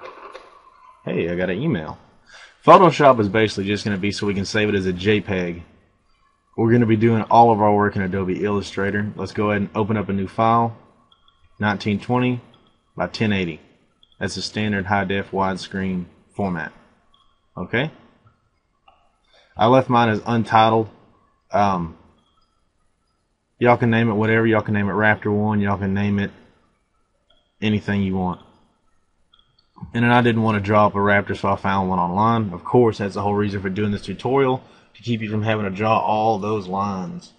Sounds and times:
Speech: 1.1s - 5.6s, 6.6s - 10.8s, 11.6s - 12.4s, 13.0s - 13.6s, 14.2s - 16.7s, 17.6s - 17.9s, 19.6s - 20.9s, 21.6s - 22.0s, 23.6s - 26.4s, 27.6s - 28.4s, 29.8s - 37.3s.

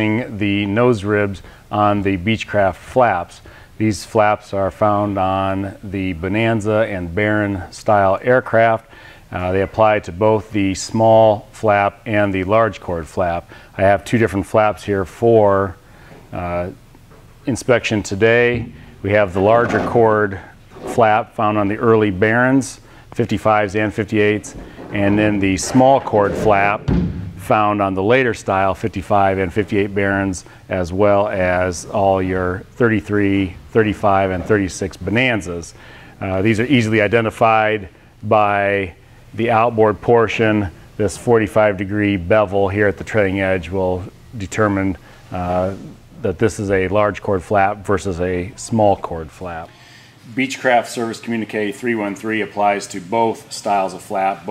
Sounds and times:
Speech: 0.0s - 16.8s, 17.5s - 54.5s.

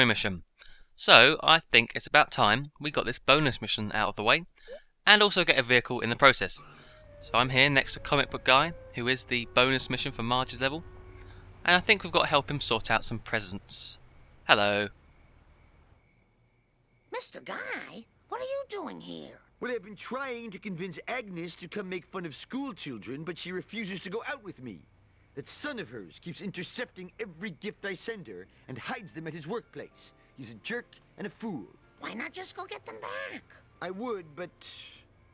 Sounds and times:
Speech: 1.0s - 4.5s, 5.1s - 6.6s, 7.3s - 10.8s, 11.7s - 14.9s, 17.2s - 24.8s, 25.4s - 35.0s.

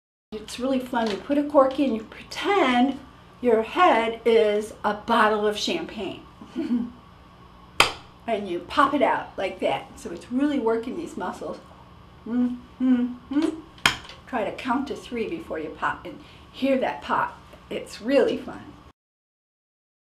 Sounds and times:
Speech: 0.4s - 6.3s, 8.3s - 11.7s, 12.3s - 13.6s, 14.3s - 18.8s.

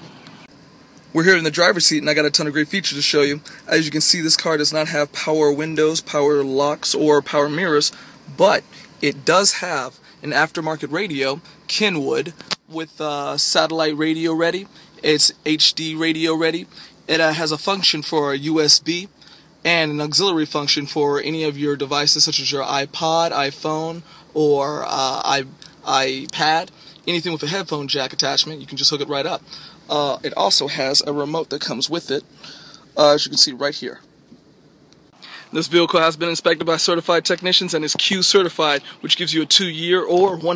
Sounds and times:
Speech: 1.1s - 32.3s, 32.9s - 34.1s, 35.3s - 40.5s.

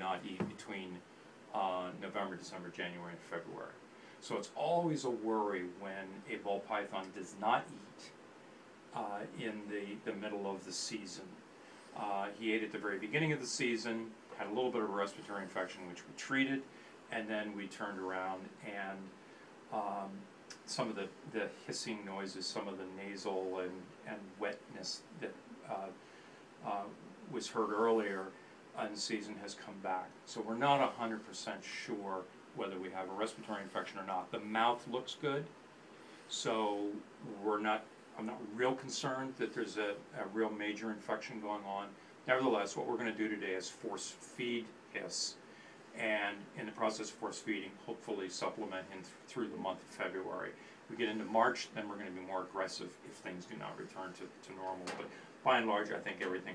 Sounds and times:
Speech: 0.0s - 8.2s, 8.9s - 11.4s, 12.0s - 26.0s, 26.6s - 35.6s, 36.3s - 56.5s
Inside, small room: 0.0s - 56.5s.

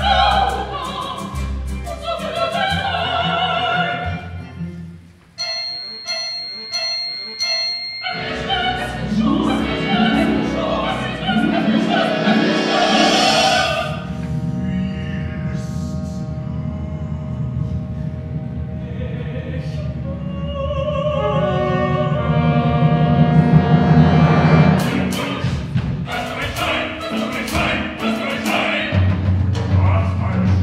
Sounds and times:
Music: 0.0s - 30.6s.

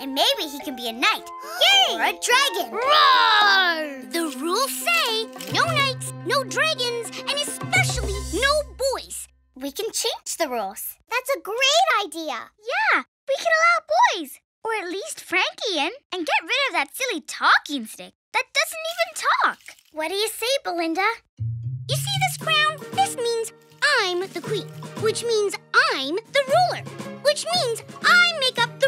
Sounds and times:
Music: 0.0s - 9.5s, 21.4s - 28.8s
Child speech, kid speaking: 0.0s - 21.3s, 21.9s - 28.8s.

